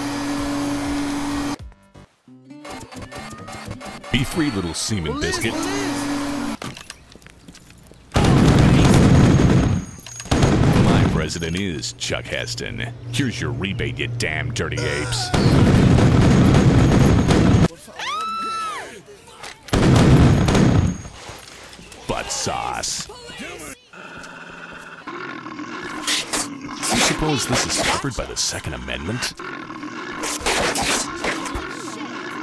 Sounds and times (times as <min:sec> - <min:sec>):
Speech: 0:04.2 - 0:05.9, 0:10.7 - 0:15.4, 0:26.9 - 0:29.4.